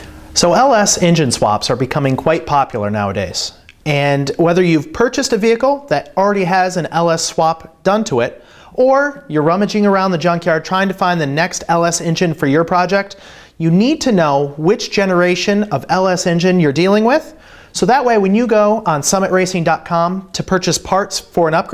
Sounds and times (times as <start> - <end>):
Speech: 0.4 - 21.7.